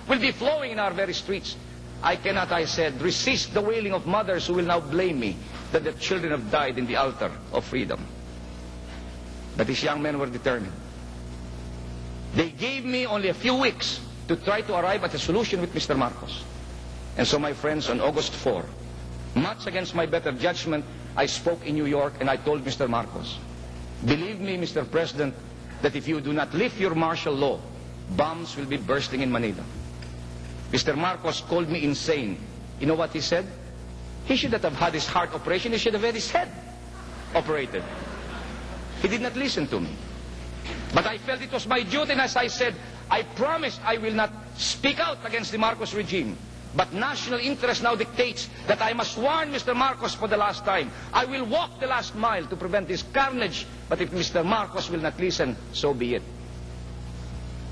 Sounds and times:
Narration, monologue: 0.0 - 57.7
Male speech, man speaking: 0.1 - 8.1, 9.6 - 10.8, 12.4 - 16.5, 17.2 - 18.8, 19.4 - 23.4, 24.0 - 29.7, 30.7 - 33.6, 34.3 - 36.6, 37.3 - 38.0, 39.0 - 40.0, 40.9 - 56.3.

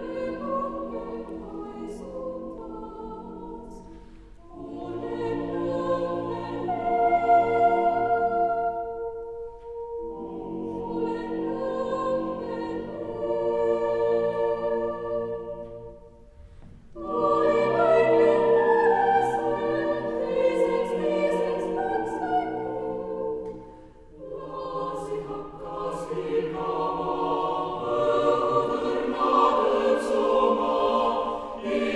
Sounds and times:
Choir: 0.0 - 31.9.

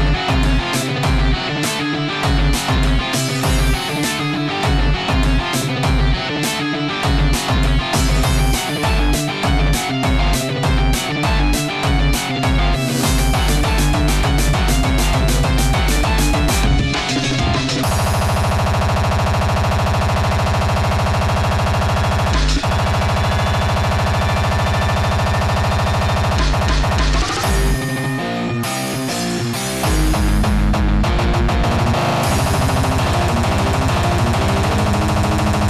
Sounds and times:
Electronic music: 0.0 - 35.6.

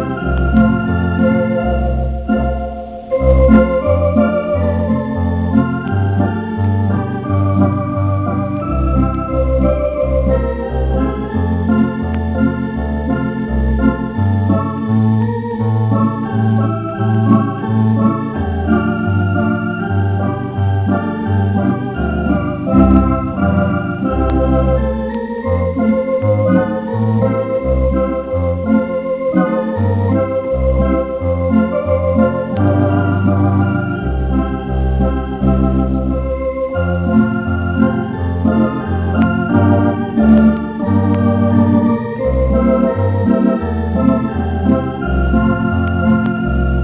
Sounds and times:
Electric piano: 0.0 - 46.8.

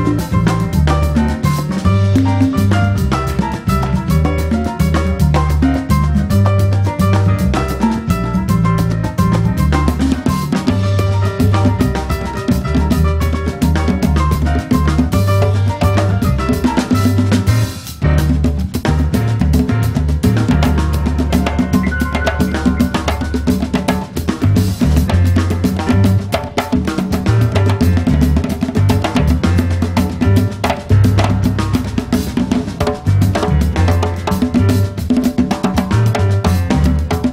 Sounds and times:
Drum: 0.0 - 37.3.

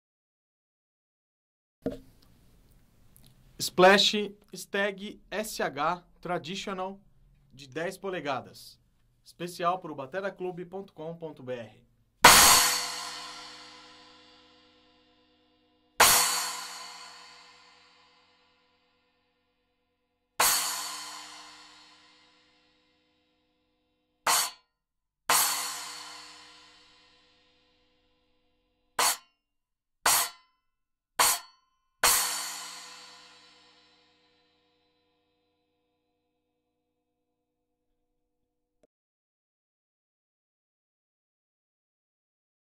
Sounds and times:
Music: 12.2 - 29.4, 30.1 - 30.6, 31.2 - 36.5.

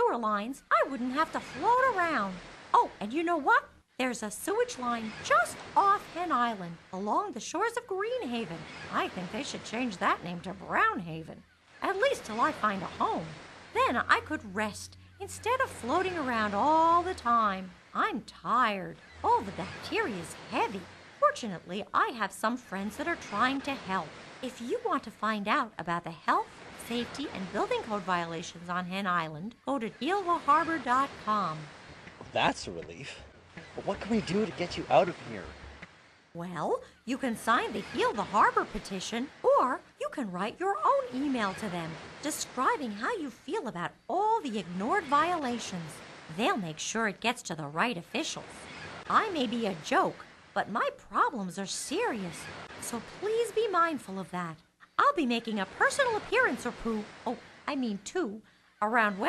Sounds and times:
Speech: 0.0 - 33.2, 33.8 - 35.5, 36.4 - 48.5, 49.1 - 59.2.

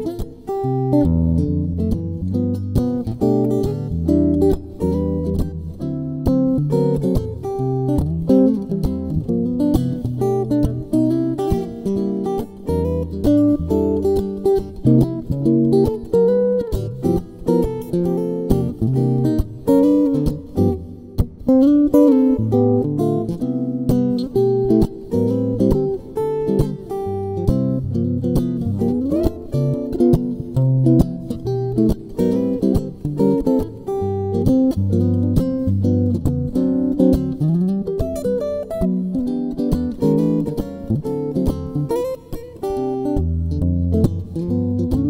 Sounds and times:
Guitar: 0.0 - 45.1.

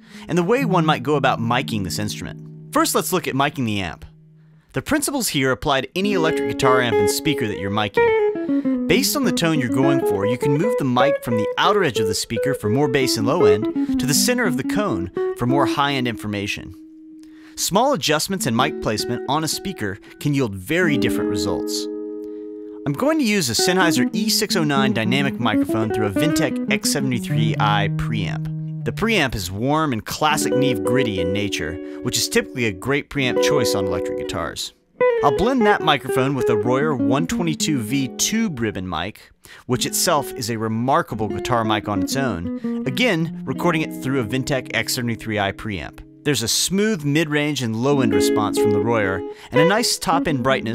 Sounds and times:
Guitar: 0.0 - 4.8, 5.7 - 50.7
Speech: 0.2 - 4.1, 4.8 - 8.2, 8.9 - 16.8, 17.6 - 21.9, 22.8 - 50.7.

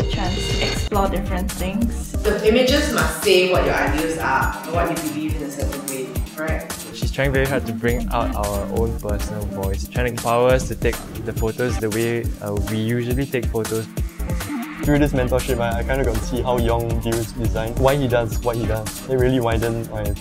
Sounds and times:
Speech: 0.0 - 13.9, 14.9 - 20.2
Music: 0.0 - 20.2.

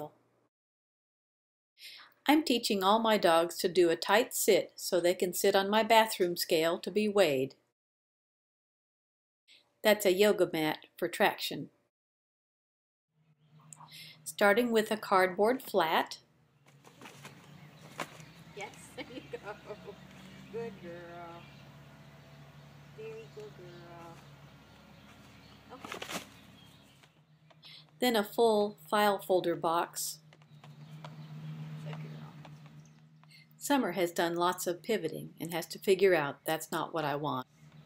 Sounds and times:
Speech: 2.3 - 7.6, 9.9 - 11.7, 14.3 - 16.2, 20.5 - 21.5, 23.0 - 24.2, 28.0 - 30.2, 31.8 - 32.4, 33.6 - 37.5.

